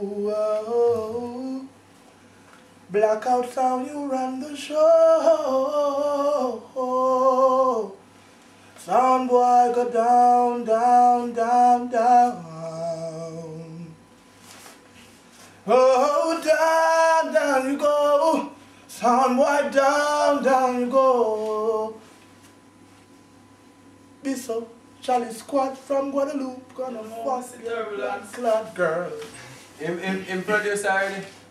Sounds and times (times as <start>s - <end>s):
Inside, small room: 0.0s - 31.5s
Speech: 29.8s - 31.4s.